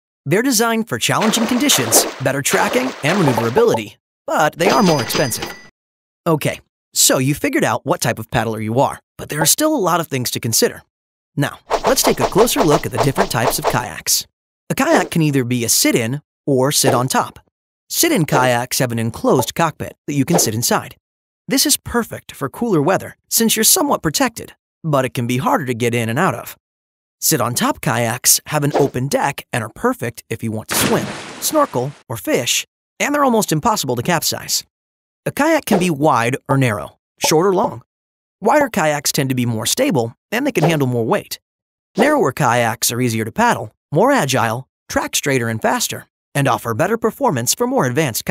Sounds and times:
Speech: 0:00.3 - 0:05.5, 0:06.3 - 0:26.6, 0:27.2 - 0:34.7, 0:35.3 - 0:41.4, 0:42.0 - 0:48.3.

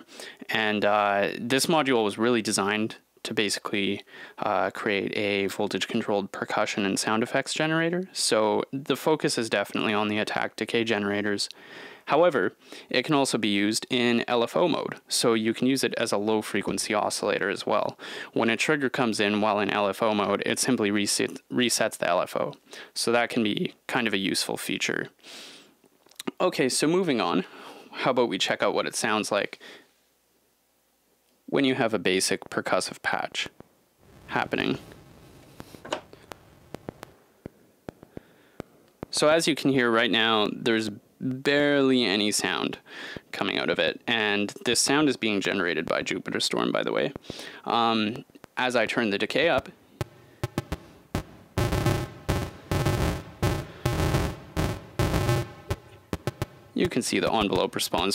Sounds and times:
Speech: 0:00.0 - 0:25.2, 0:26.2 - 0:29.6, 0:31.5 - 0:33.6, 0:34.3 - 0:34.8, 0:39.1 - 0:49.8, 0:56.8 - 0:58.1.

